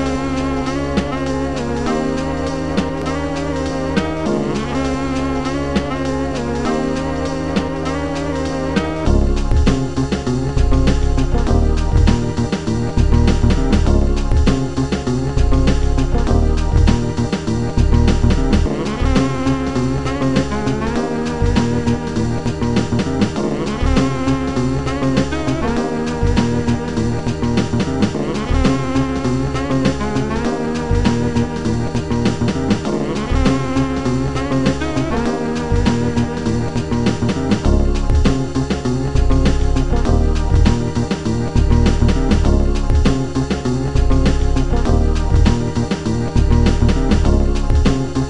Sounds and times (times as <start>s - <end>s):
Soundtrack music: 0.0s - 48.3s.